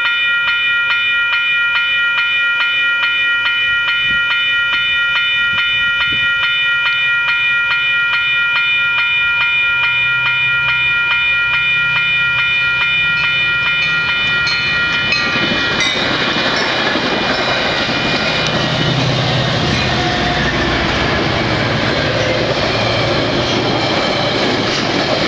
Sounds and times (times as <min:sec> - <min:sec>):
Railroad car, train wagon: 0:00.0 - 0:25.2
Train: 0:00.0 - 0:25.2.